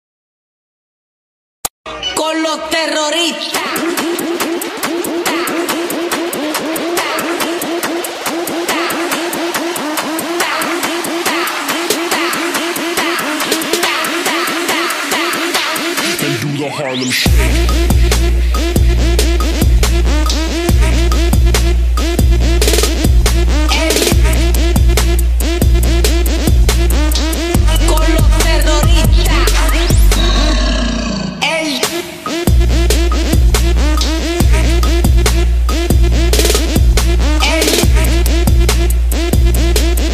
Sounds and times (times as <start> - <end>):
House music: 1.9 - 40.1.